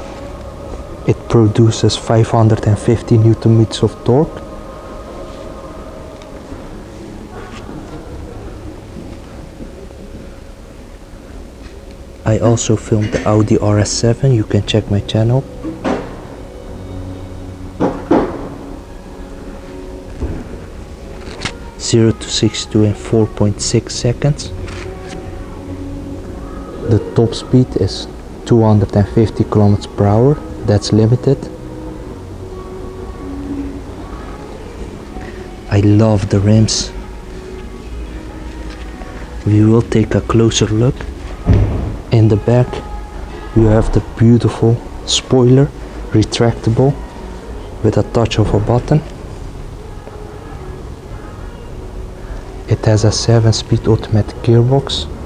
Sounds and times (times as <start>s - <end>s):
Inside, large room or hall: 0.0s - 55.2s
Music: 0.0s - 55.2s
Speech: 1.1s - 4.4s, 12.3s - 15.5s, 21.8s - 24.6s, 26.8s - 31.5s, 35.7s - 37.0s, 39.4s - 41.0s, 42.1s - 42.9s, 43.6s - 47.0s, 47.8s - 49.1s, 52.7s - 55.1s.